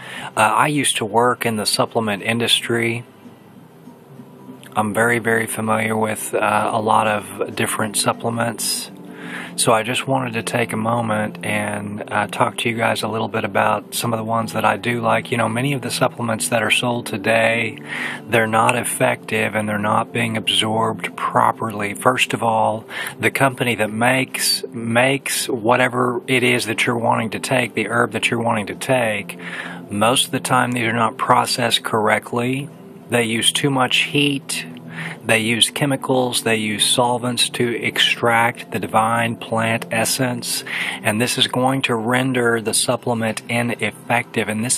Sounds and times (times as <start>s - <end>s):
Speech: 0.0s - 3.1s, 4.6s - 44.7s.